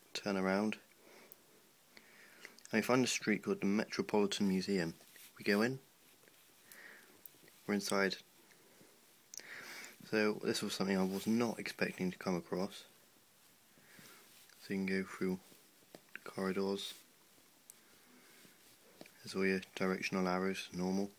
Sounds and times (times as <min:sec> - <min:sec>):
Speech: 0:00.1 - 0:00.8, 0:02.7 - 0:05.9, 0:07.7 - 0:08.2, 0:10.0 - 0:12.9, 0:14.6 - 0:15.5, 0:16.2 - 0:17.0, 0:19.2 - 0:21.1.